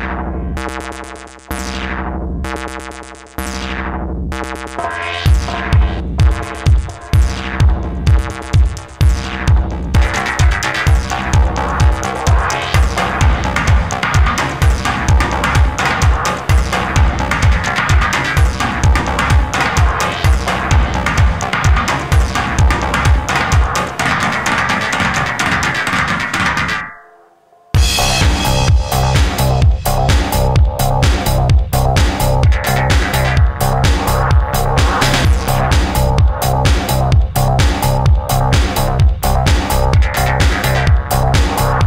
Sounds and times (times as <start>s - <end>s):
Music: 0.0s - 41.8s.